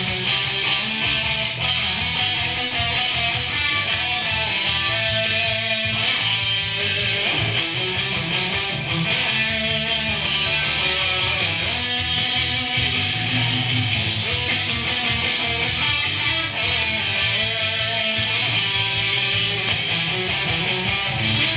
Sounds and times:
Music: 0:00.0 - 0:21.5.

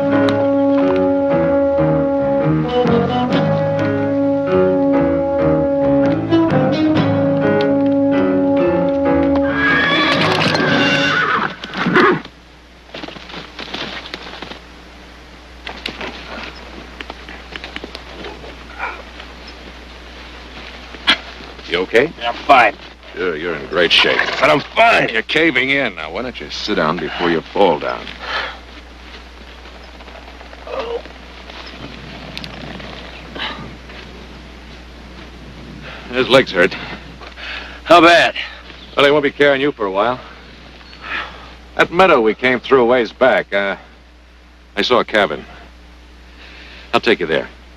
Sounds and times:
Speech: 0:21.6 - 0:28.1, 0:41.8 - 0:43.9, 0:44.8 - 0:45.6, 0:46.9 - 0:47.6.

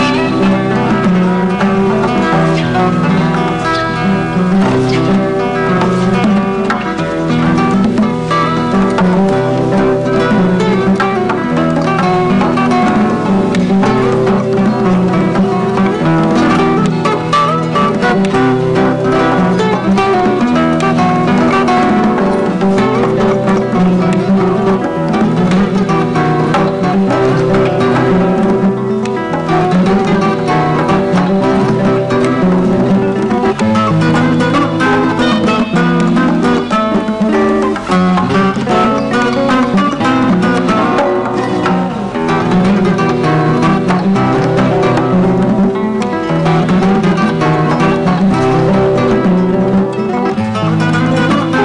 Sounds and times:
Music: 0:00.0 - 0:51.6.

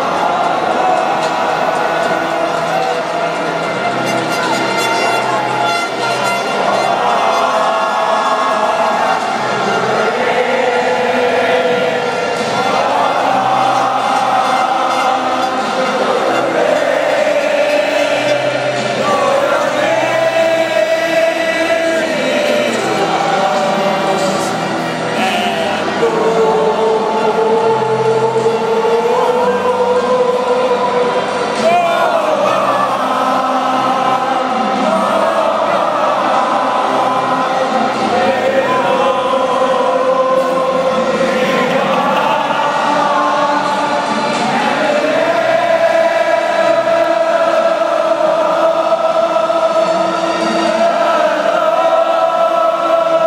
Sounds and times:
Choir: 0:00.0 - 0:53.2.

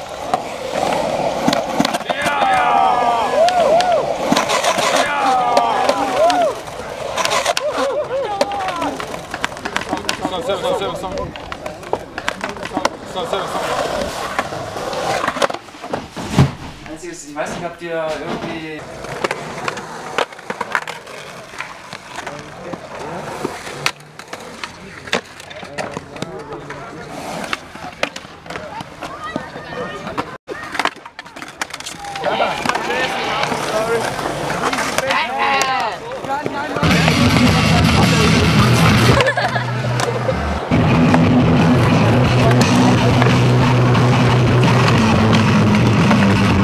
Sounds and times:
Skateboard: 0:00.0 - 0:46.6.

